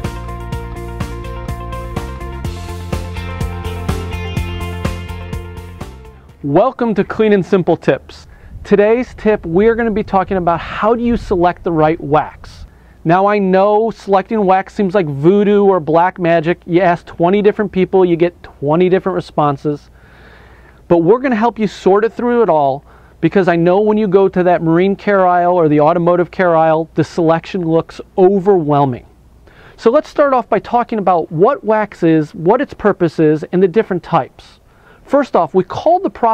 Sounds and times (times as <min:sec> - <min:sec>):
Speech: 0:06.4 - 0:19.9, 0:20.9 - 0:29.1, 0:29.8 - 0:36.3.